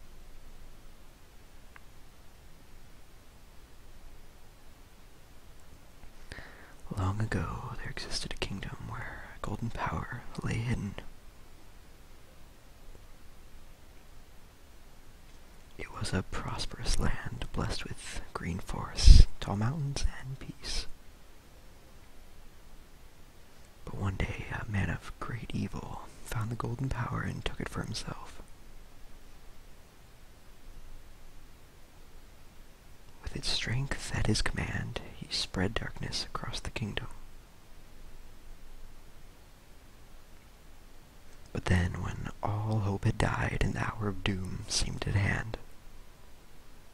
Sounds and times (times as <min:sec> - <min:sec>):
Speech: 0:06.9 - 0:11.1, 0:15.8 - 0:20.9, 0:23.8 - 0:28.4, 0:33.2 - 0:37.2, 0:41.5 - 0:45.6.